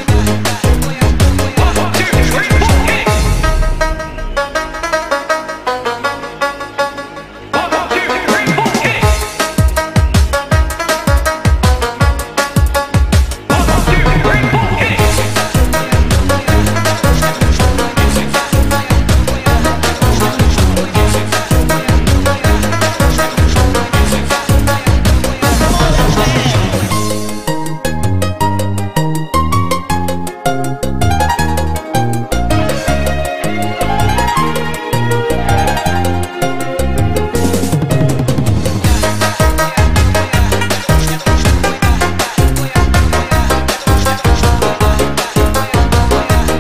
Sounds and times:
House music: 0.0s - 46.6s.

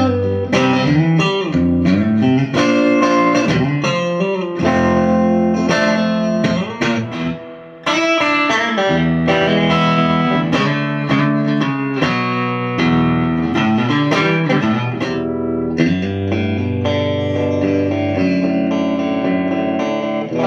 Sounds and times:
Music: 0.0s - 20.4s.

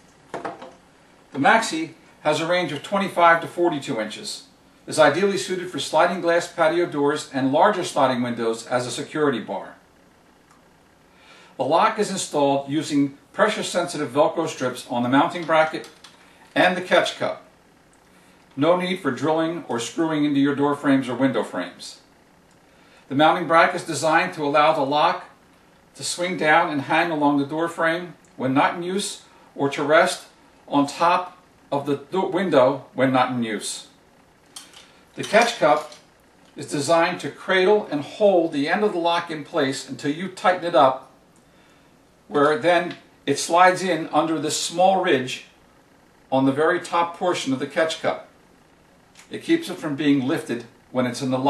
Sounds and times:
Speech: 1.4s - 9.8s, 11.6s - 16.0s, 16.6s - 17.5s, 18.6s - 22.1s, 23.1s - 25.4s, 26.0s - 34.0s, 35.2s - 36.0s, 36.6s - 41.1s, 42.3s - 45.6s, 46.3s - 48.3s, 49.2s - 51.4s.

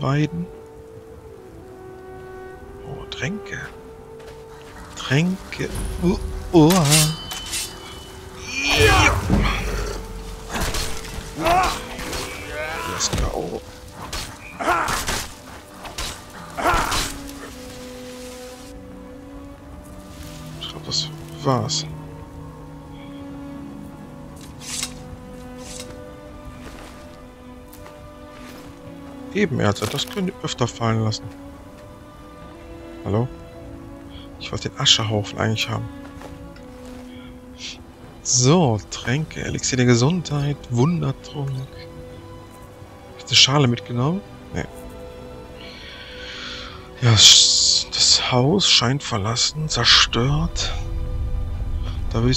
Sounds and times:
Speech: 0.0s - 0.5s, 5.0s - 7.2s, 20.6s - 21.9s, 29.3s - 31.3s, 34.4s - 35.9s, 37.6s - 41.9s, 43.2s - 44.7s, 47.0s - 50.9s, 51.9s - 52.3s
Music: 0.0s - 52.3s.

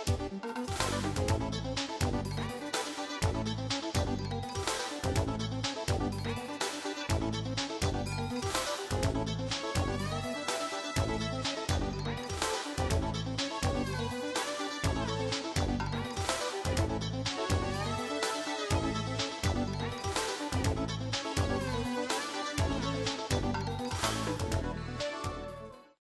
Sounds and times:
Music: 0.0s - 26.0s.

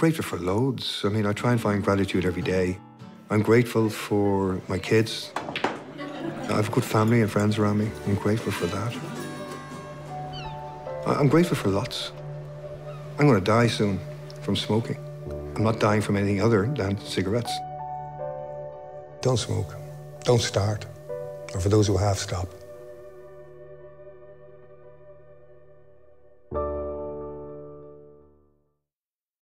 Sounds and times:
Speech: 0.0s - 5.4s, 6.4s - 9.0s, 11.0s - 12.2s, 13.2s - 15.0s, 15.6s - 17.7s, 19.2s - 22.6s
Music: 0.0s - 28.8s.

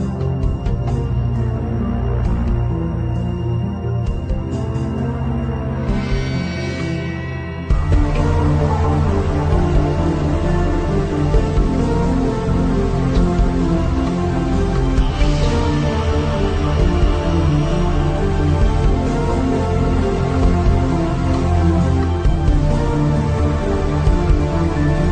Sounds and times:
Music: 0.0s - 25.1s.

